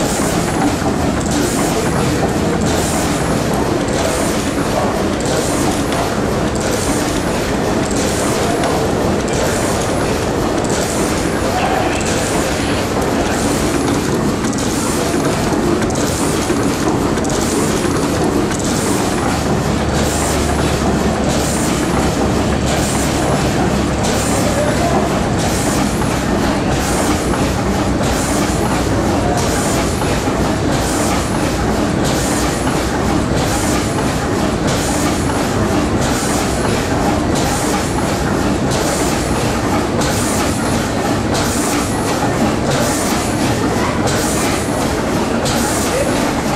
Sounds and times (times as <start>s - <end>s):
Engine: 0.0s - 46.5s.